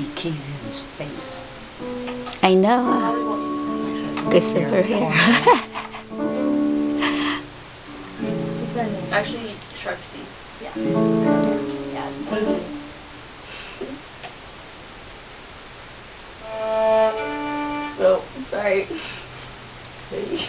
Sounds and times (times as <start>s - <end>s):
Speech: 0.0s - 1.4s, 2.4s - 5.2s, 20.1s - 20.4s.